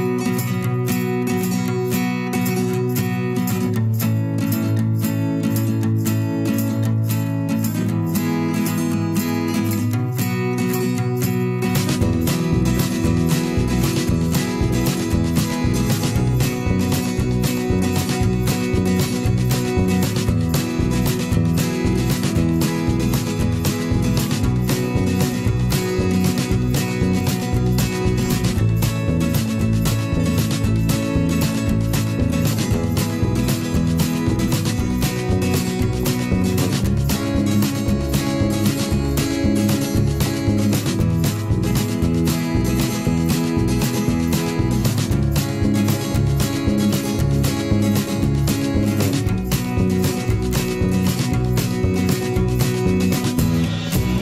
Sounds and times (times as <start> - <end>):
Music: 0.0 - 54.2.